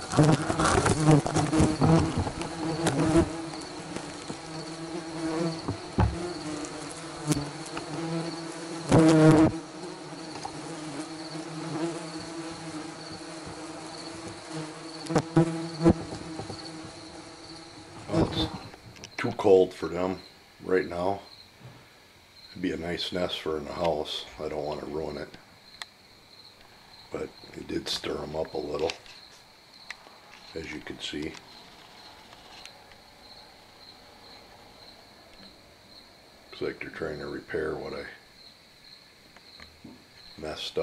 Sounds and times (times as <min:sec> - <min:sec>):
Bee, wasp, etc.: 0:00.0 - 0:40.8
Cricket: 0:00.0 - 0:40.8
Fly, housefly: 0:00.0 - 0:40.8.